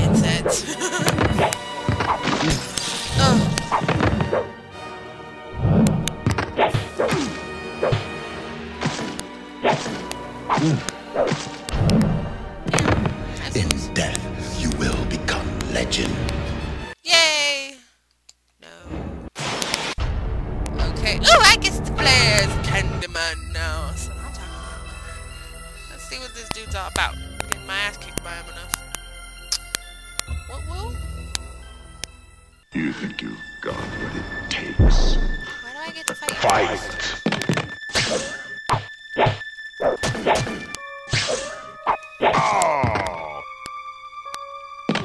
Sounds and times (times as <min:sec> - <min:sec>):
Music: 0:00.0 - 0:17.0, 0:20.0 - 0:45.0
Speech: 0:03.2 - 0:03.5, 0:17.0 - 0:17.9, 0:18.6 - 0:18.9, 0:20.8 - 0:24.8, 0:25.9 - 0:28.7, 0:32.8 - 0:36.9.